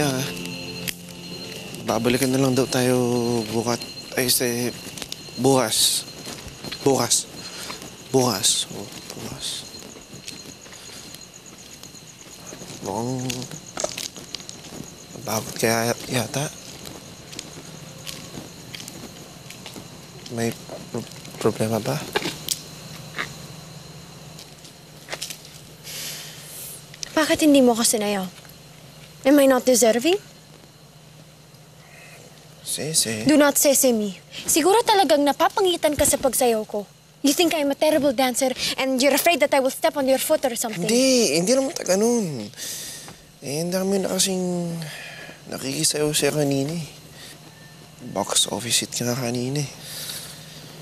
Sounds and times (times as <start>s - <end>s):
Outside, rural or natural: 0.0s - 50.8s.